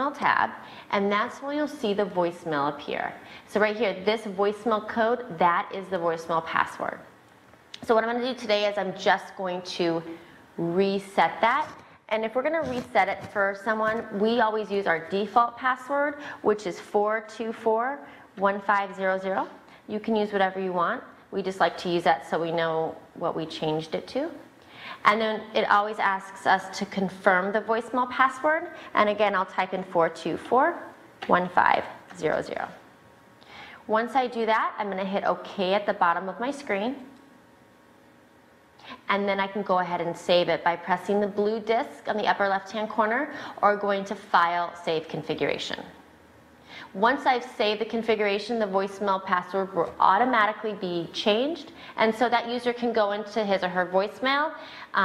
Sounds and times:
Female speech, woman speaking: 0.0s - 7.1s, 7.8s - 24.4s, 25.1s - 32.8s, 33.9s - 37.1s, 39.1s - 46.0s, 47.0s - 55.0s.

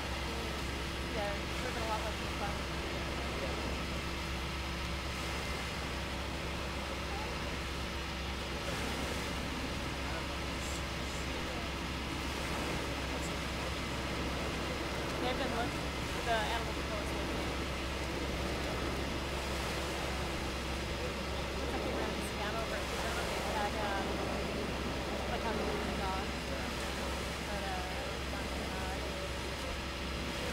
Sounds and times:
Speech: 0.0s - 4.0s, 8.5s - 13.9s, 15.1s - 17.8s, 20.0s - 30.5s.

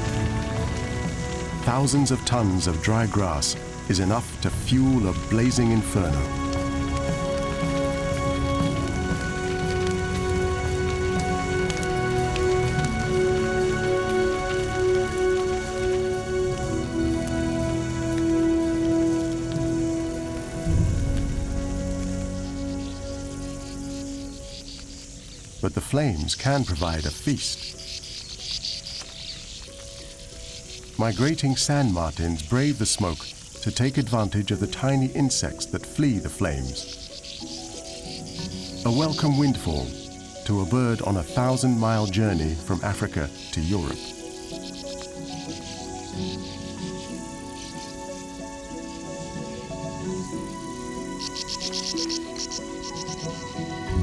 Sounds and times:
Fire: 0.0s - 54.0s.

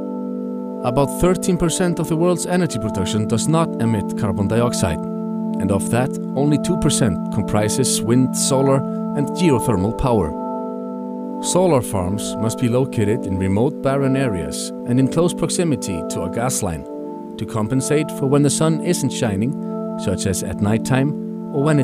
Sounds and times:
Music: 0.0s - 21.8s
Speech: 0.8s - 5.0s, 5.6s - 10.4s, 11.4s - 21.8s.

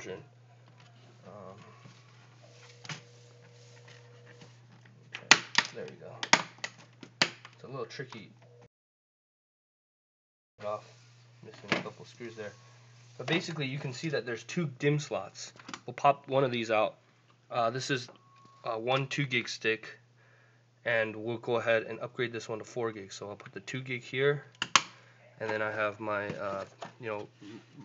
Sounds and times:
Speech: 0.0s - 0.3s, 1.2s - 1.7s, 5.7s - 6.2s, 7.6s - 8.4s, 10.6s - 12.6s, 13.2s - 20.0s, 20.8s - 24.5s, 25.4s - 27.8s.

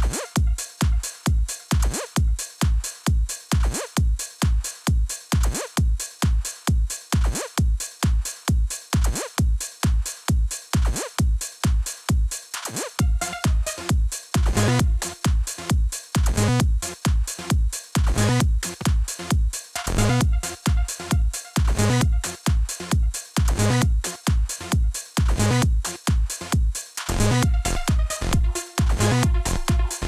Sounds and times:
Music: 0.0s - 30.0s.

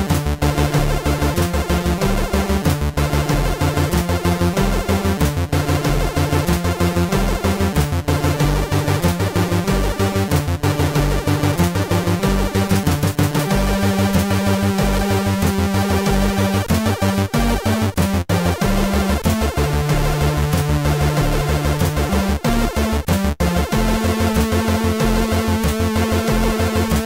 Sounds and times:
Soundtrack music: 0.0s - 27.0s.

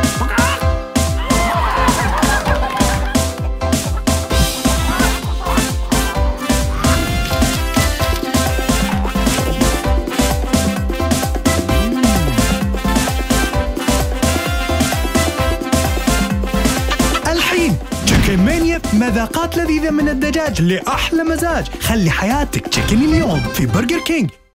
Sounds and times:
Music: 0.0s - 24.5s
Speech: 17.2s - 24.4s.

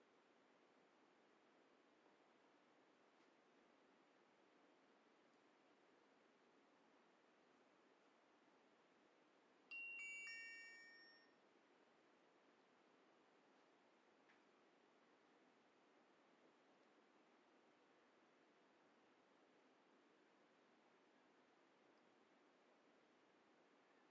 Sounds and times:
Music: 9.7s - 11.4s.

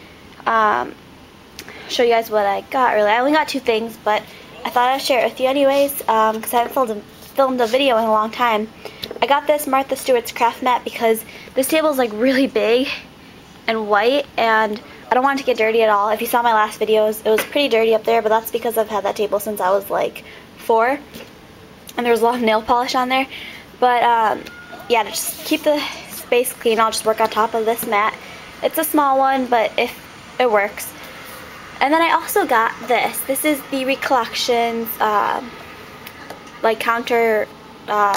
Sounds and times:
Speech: 0.4s - 1.0s, 1.9s - 13.0s, 13.7s - 21.1s, 21.9s - 31.0s, 31.8s - 35.5s, 36.6s - 38.1s.

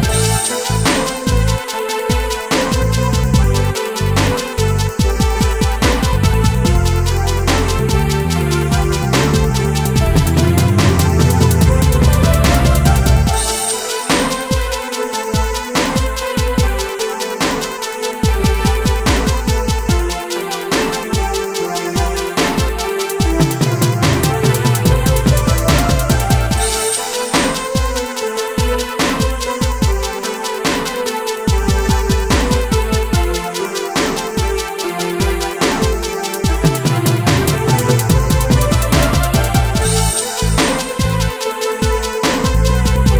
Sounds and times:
Music: 0.0s - 43.2s.

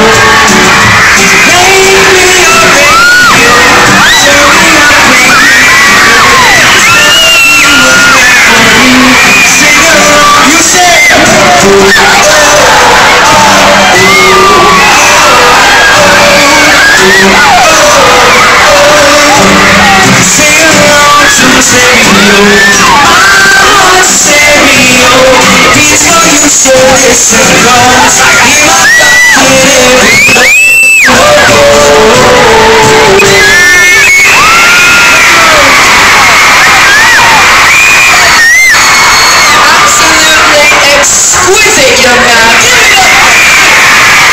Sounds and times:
Crowd: 0.0s - 44.3s
Music: 0.0s - 44.3s
Singing: 0.0s - 44.3s.

